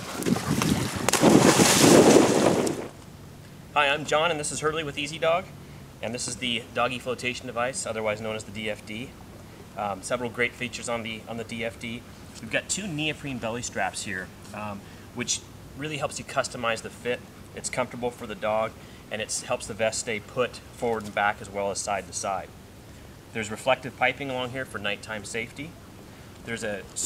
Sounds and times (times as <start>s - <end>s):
Speech: 3.8s - 9.1s, 9.8s - 22.5s, 23.4s - 25.8s, 26.5s - 27.0s.